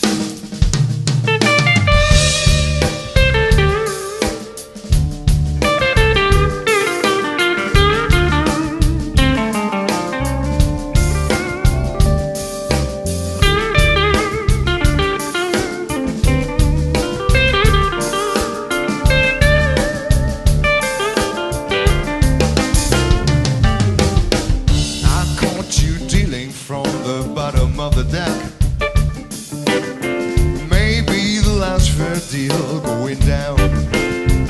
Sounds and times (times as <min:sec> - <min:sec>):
Electric guitar: 0:01.2 - 0:34.4.